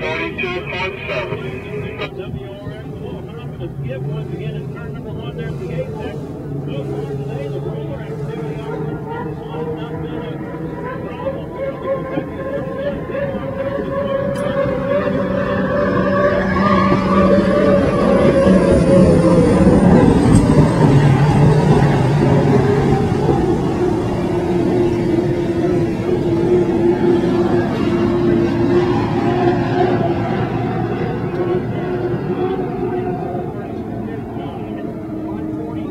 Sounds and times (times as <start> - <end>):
Motorboat, speedboat: 0.0 - 35.9.